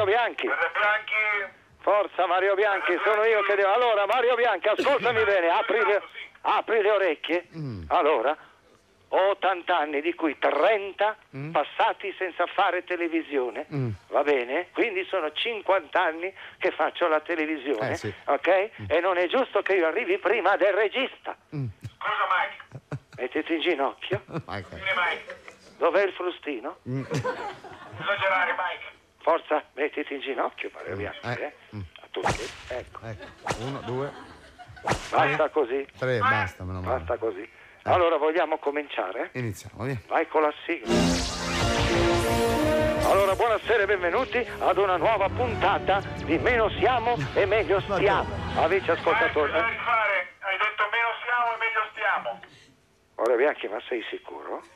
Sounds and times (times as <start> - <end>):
Speech: 9.1 - 27.1, 35.2 - 40.8.